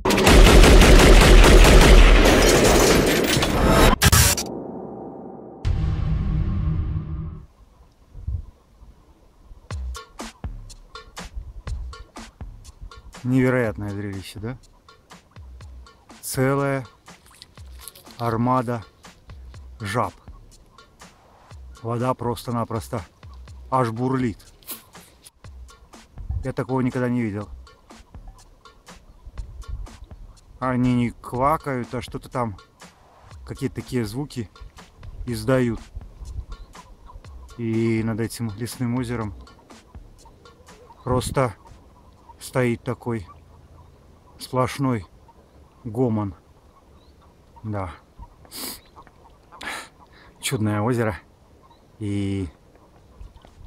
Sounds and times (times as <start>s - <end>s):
Outside, rural or natural: 0.0s - 53.6s
Music: 5.6s - 7.5s, 9.6s - 42.1s
Speech: 13.2s - 14.6s, 16.2s - 16.9s, 18.1s - 18.9s, 19.8s - 20.2s, 21.8s - 23.1s, 23.7s - 24.5s, 26.4s - 27.6s, 30.6s - 32.6s, 33.4s - 34.5s, 35.3s - 35.9s, 37.6s - 39.4s, 41.0s - 41.6s, 42.4s - 43.3s, 44.4s - 45.1s, 45.8s - 46.4s, 47.6s - 48.0s, 50.4s - 51.3s, 52.0s - 52.6s.